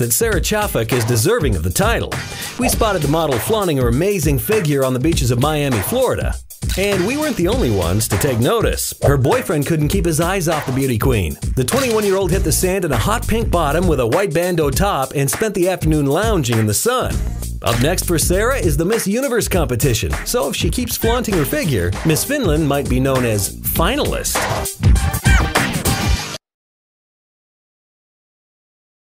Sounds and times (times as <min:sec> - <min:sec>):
Speech: 0:00.0 - 0:24.4
Music: 0:00.0 - 0:26.5.